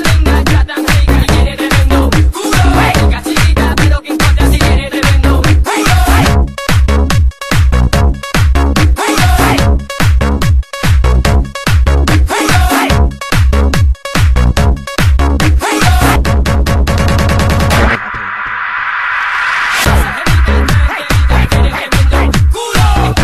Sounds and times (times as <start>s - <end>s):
House music: 0.0s - 23.2s.